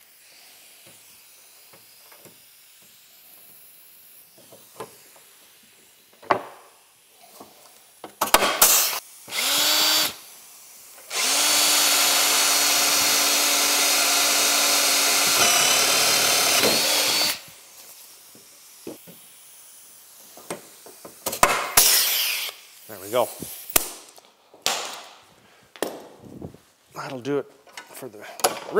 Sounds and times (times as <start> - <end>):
Drill: 8.3 - 10.3, 11.0 - 17.5, 21.8 - 22.6.